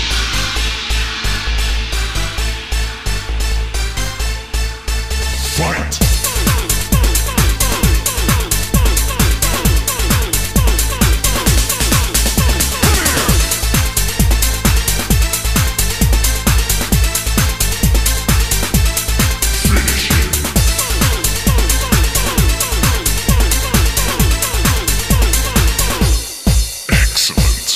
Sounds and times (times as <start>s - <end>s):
Techno: 0.0s - 27.7s.